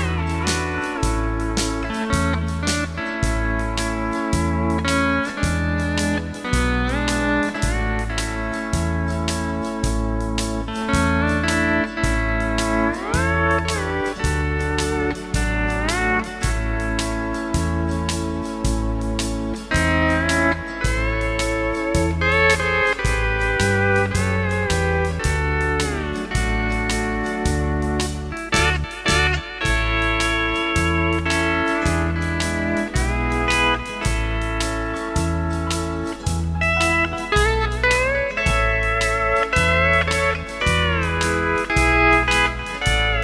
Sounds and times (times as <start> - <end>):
Steel guitar, slide guitar: 0.0 - 43.2.